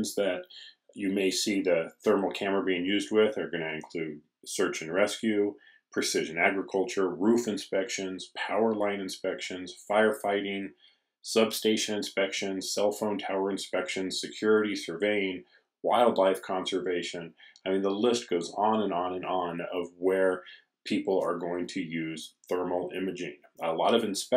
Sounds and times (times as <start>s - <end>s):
Speech: 0.0s - 24.3s.